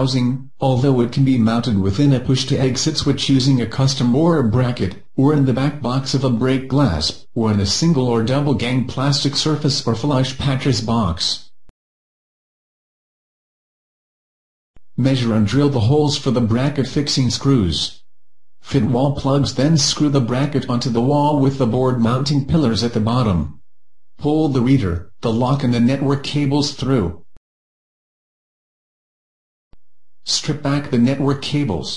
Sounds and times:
Speech: 0:00.0 - 0:11.5, 0:15.0 - 0:18.0, 0:18.6 - 0:23.6, 0:24.2 - 0:27.2, 0:30.2 - 0:31.9.

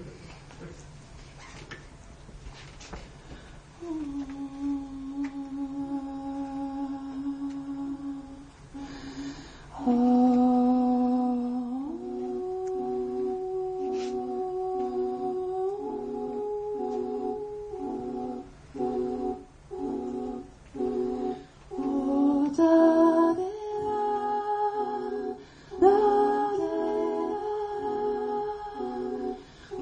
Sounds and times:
Inside, large room or hall: 0:00.0 - 0:29.8
Humming: 0:03.8 - 0:29.8.

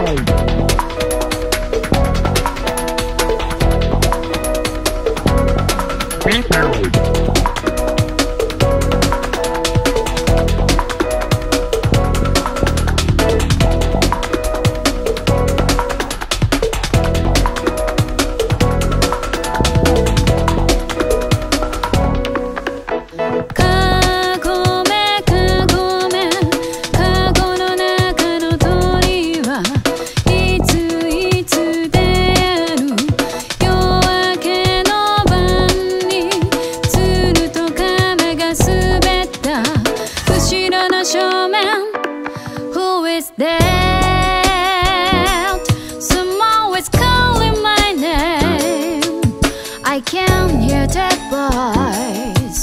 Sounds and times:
Exciting music: 0:00.0 - 0:27.6
New-age music: 0:00.0 - 0:52.6.

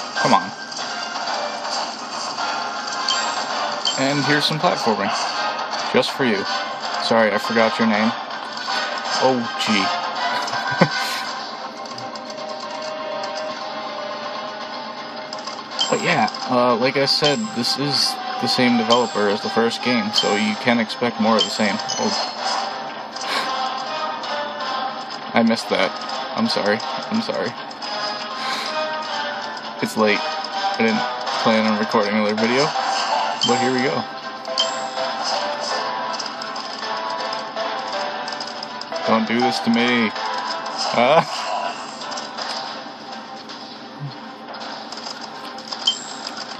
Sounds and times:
Music: 0:00.0 - 0:46.5
Speech: 0:04.0 - 0:05.1, 0:06.0 - 0:08.2, 0:09.2 - 0:09.9, 0:15.9 - 0:22.2, 0:25.4 - 0:27.5, 0:29.8 - 0:30.2, 0:30.8 - 0:32.7, 0:33.4 - 0:34.1, 0:39.1 - 0:40.1.

